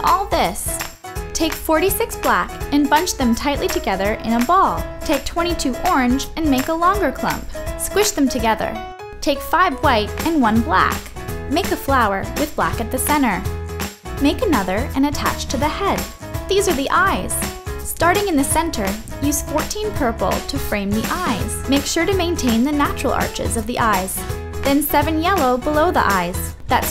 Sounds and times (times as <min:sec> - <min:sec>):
Speech: 0:00.0 - 0:00.8, 0:01.4 - 0:13.5, 0:14.2 - 0:26.9
Music: 0:00.0 - 0:26.9.